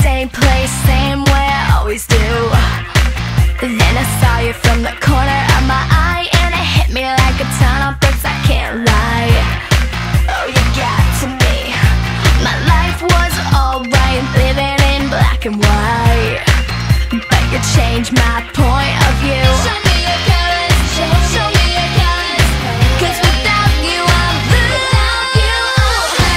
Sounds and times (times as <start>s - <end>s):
Music: 0.0s - 26.3s.